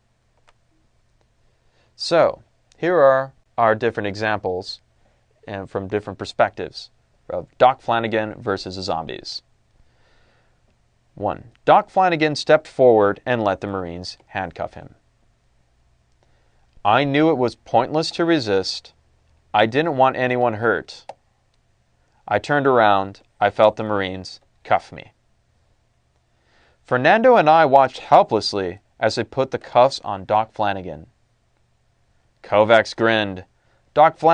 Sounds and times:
Narration, monologue: 0.0 - 34.3.

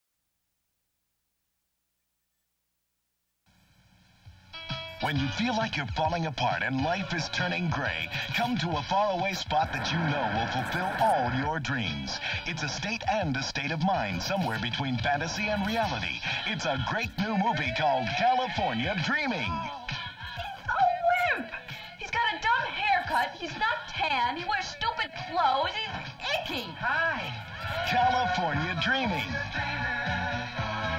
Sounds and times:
Music: 3.9 - 30.9
Speech: 5.0 - 19.7, 20.4 - 29.4.

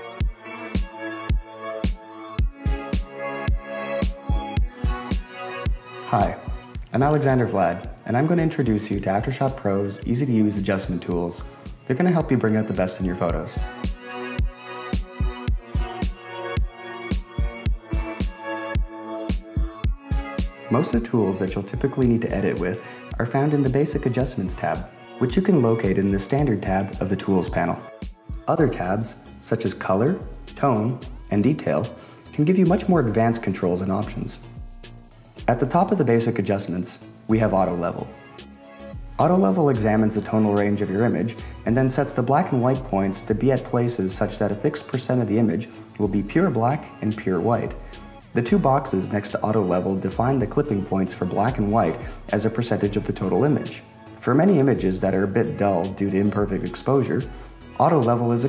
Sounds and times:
Music: 0.0 - 58.4
Speech: 6.1 - 13.7, 20.7 - 27.9, 28.5 - 34.4, 35.5 - 38.2, 39.2 - 58.4.

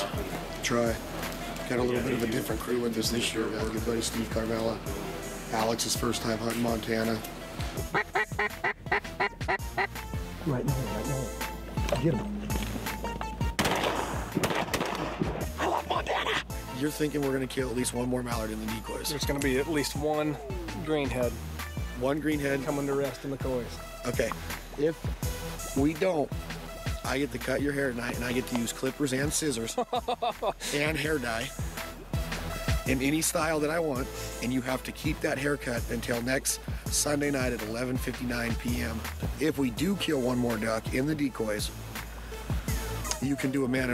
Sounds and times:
Music: 0.0 - 43.9
Speech: 1.7 - 4.8, 16.8 - 21.4, 27.1 - 29.7, 30.6 - 31.5, 32.9 - 41.7, 43.2 - 43.9.

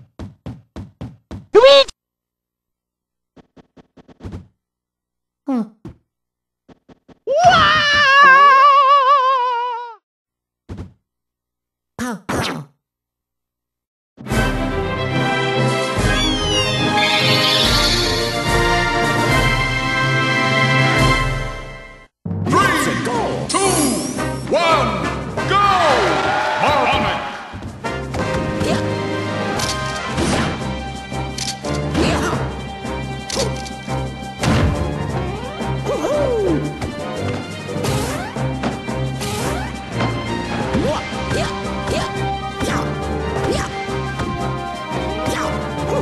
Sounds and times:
Music: 14.2 - 46.0.

